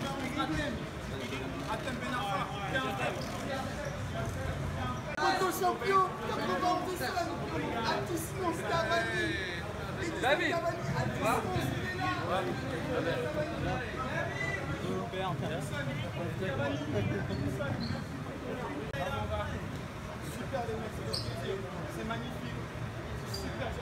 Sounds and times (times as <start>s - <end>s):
Speech: 0.0s - 23.8s.